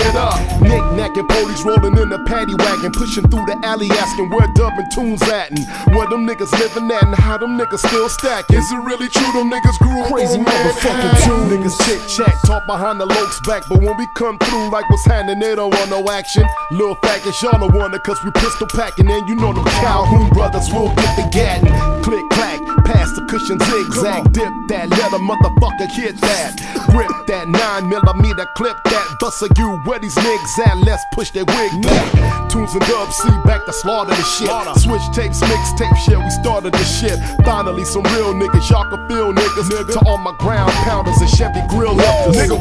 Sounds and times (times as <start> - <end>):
Hip hop music: 0.0 - 42.6
Rapping: 0.0 - 42.6.